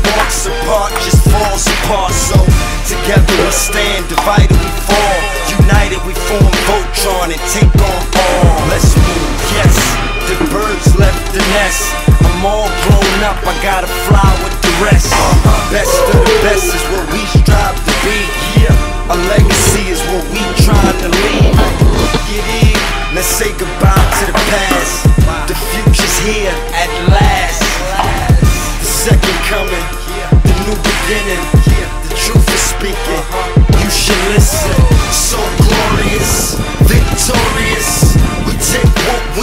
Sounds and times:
Music: 0:00.0 - 0:39.4.

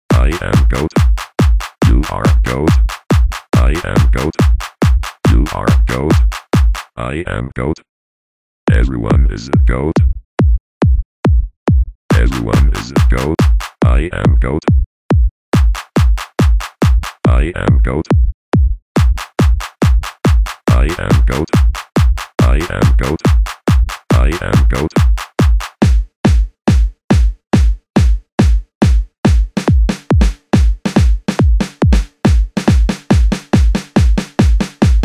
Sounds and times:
Speech: 0:00.1 - 0:01.0, 0:01.8 - 0:02.8, 0:03.6 - 0:04.4, 0:05.3 - 0:06.3, 0:07.0 - 0:07.9, 0:08.7 - 0:10.1, 0:12.1 - 0:14.8, 0:17.3 - 0:18.1, 0:20.7 - 0:21.6, 0:22.4 - 0:23.3, 0:24.1 - 0:25.0
Music: 0:00.1 - 0:07.0, 0:12.1 - 0:13.9, 0:15.1 - 0:17.3, 0:18.1 - 0:35.0.

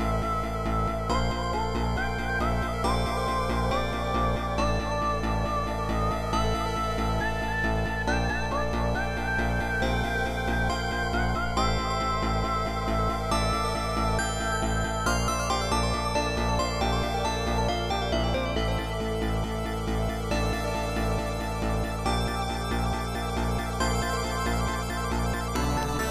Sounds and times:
Music: 0:00.0 - 0:26.1.

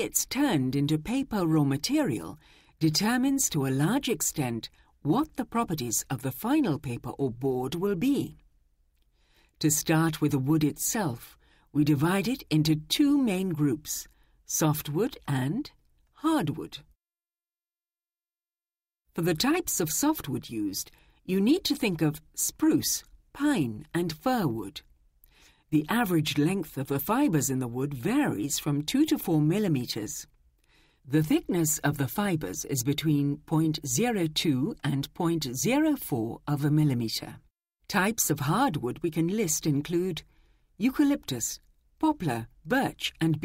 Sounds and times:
Speech: 0:00.0 - 0:08.4, 0:09.6 - 0:16.9, 0:19.2 - 0:24.9, 0:25.8 - 0:30.3, 0:31.1 - 0:40.2, 0:40.8 - 0:43.4.

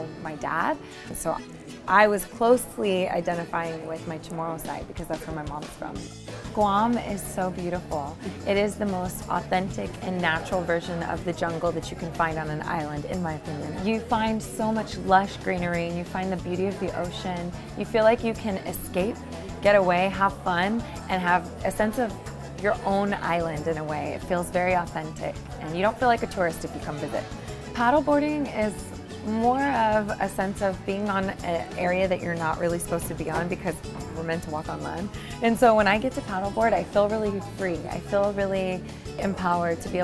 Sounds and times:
Speech: 0:00.0 - 0:06.0, 0:06.6 - 0:40.0
Music: 0:00.0 - 0:40.0.

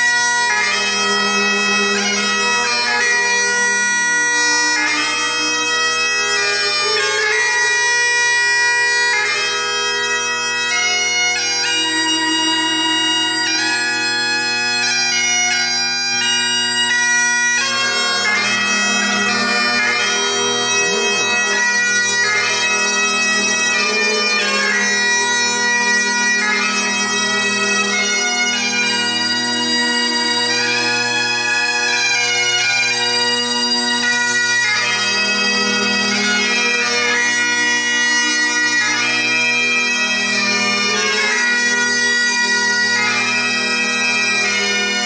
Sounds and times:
Bagpipes: 0:00.0 - 0:45.0.

